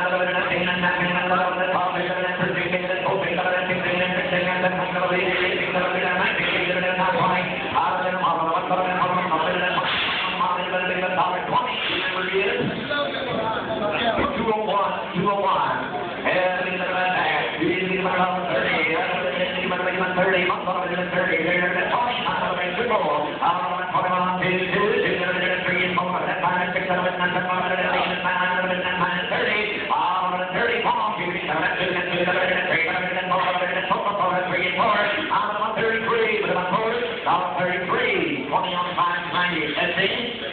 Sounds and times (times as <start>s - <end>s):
Speech: 0.0s - 40.5s.